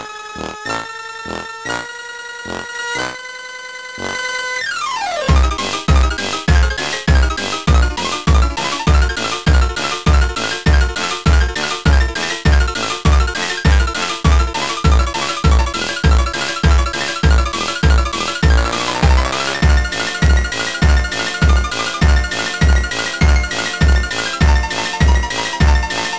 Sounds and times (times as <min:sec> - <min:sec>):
Rhythm and blues: 0:05.2 - 0:26.1.